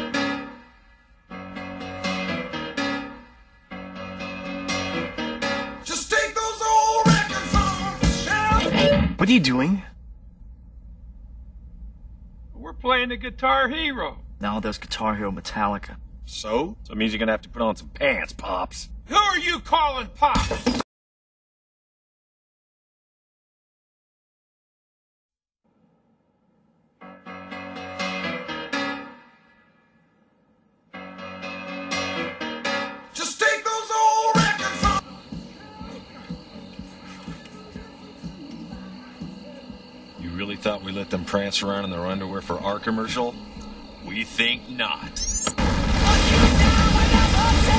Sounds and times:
Guitar: 0.0 - 9.8, 27.0 - 29.9, 30.9 - 47.7
Speech: 12.6 - 20.5, 40.2 - 43.4, 44.1 - 45.2.

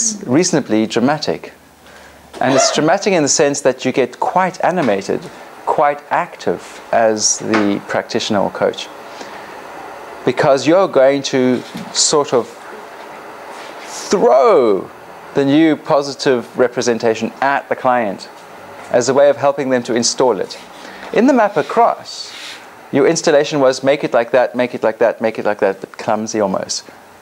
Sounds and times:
Speech: 0.0 - 1.6, 2.4 - 8.9, 10.2 - 12.6, 13.9 - 18.3, 18.9 - 27.0.

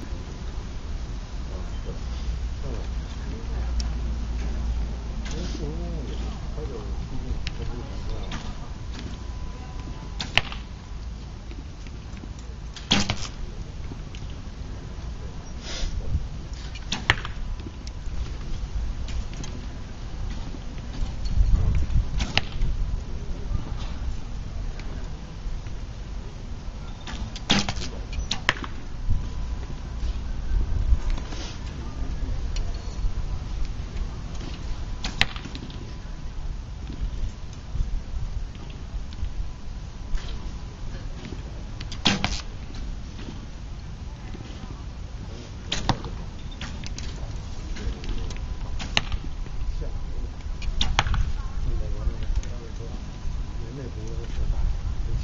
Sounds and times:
Arrow: 10.2 - 10.7, 12.8 - 13.4, 16.7 - 17.4, 22.2 - 22.7, 27.1 - 28.8, 34.4 - 35.8, 41.2 - 42.5, 45.7 - 47.2, 48.8 - 49.3, 50.7 - 51.3.

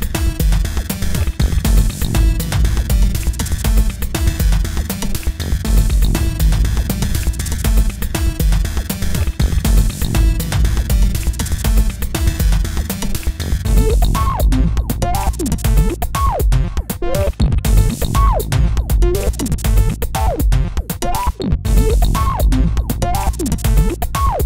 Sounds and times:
Drum machine: 0.0 - 24.4.

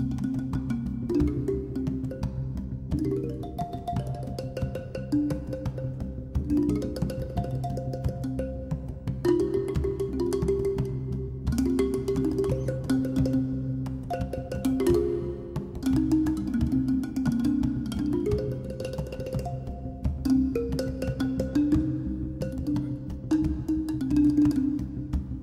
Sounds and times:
Music: 0.0 - 25.4.

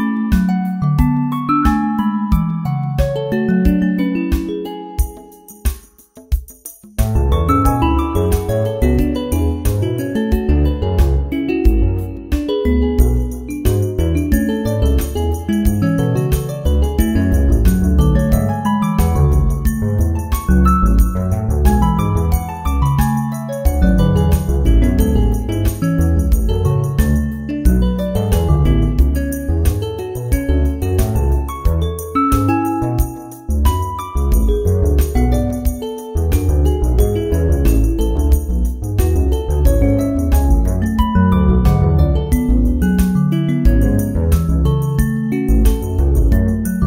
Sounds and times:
Music: 0.0 - 46.8.

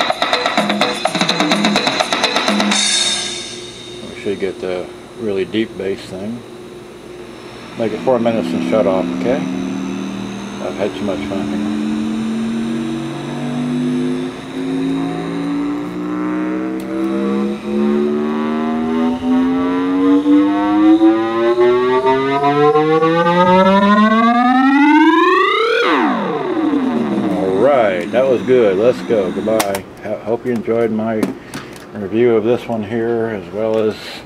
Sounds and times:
Music: 0.0 - 4.9, 17.5 - 29.6
Speech: 4.0 - 6.4, 7.8 - 9.5, 10.6 - 11.7, 27.3 - 31.4, 32.0 - 34.2
Radio: 10.6 - 12.0, 27.2 - 29.9.

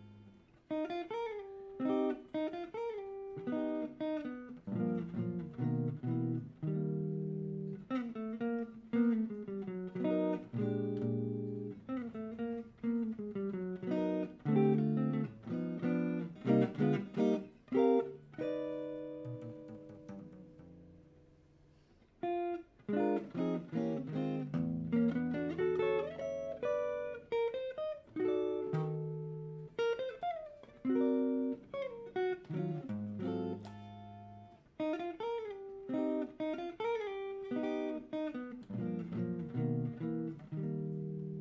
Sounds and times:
Electric guitar: 0.0 - 41.4.

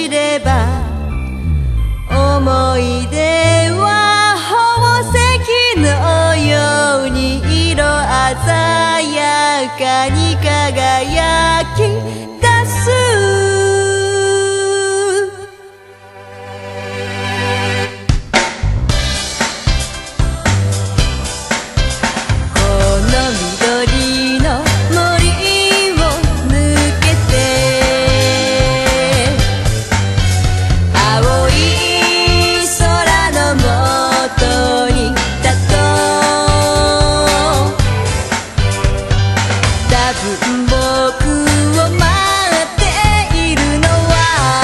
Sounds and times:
Music: 0.0 - 44.6.

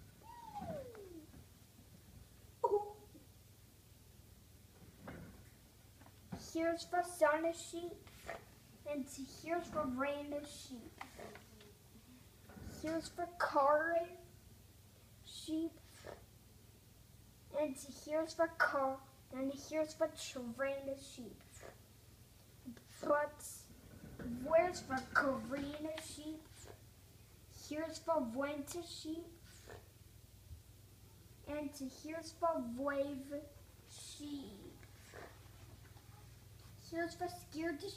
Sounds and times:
Speech: 6.4 - 11.8, 12.6 - 14.3, 15.2 - 16.2, 17.5 - 21.8, 22.6 - 26.8, 27.5 - 29.5, 31.4 - 35.4, 36.0 - 37.9.

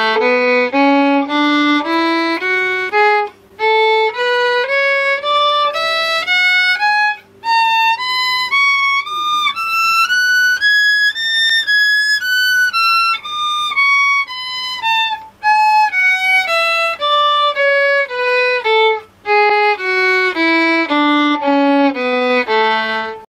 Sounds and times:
Violin, fiddle: 0.0 - 23.3.

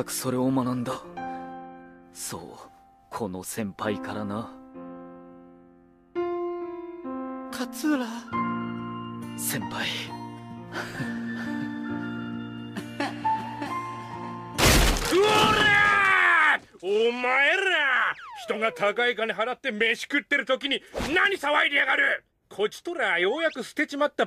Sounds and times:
Male speech, man speaking: 0.0 - 1.0, 2.2 - 4.6, 7.5 - 8.2, 9.4 - 10.1, 16.4 - 24.2
Music: 0.0 - 15.1.

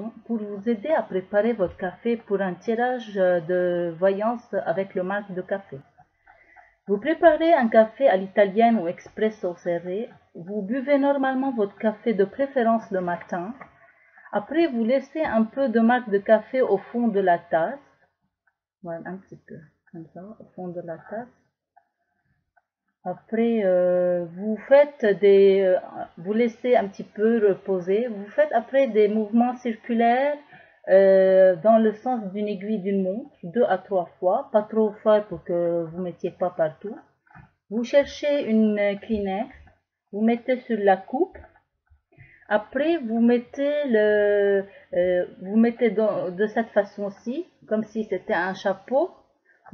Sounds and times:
Speech: 0.0 - 5.8, 6.9 - 13.6, 14.3 - 17.8, 18.9 - 21.3, 23.1 - 37.0, 37.8 - 39.6, 40.2 - 41.4, 42.5 - 49.1.

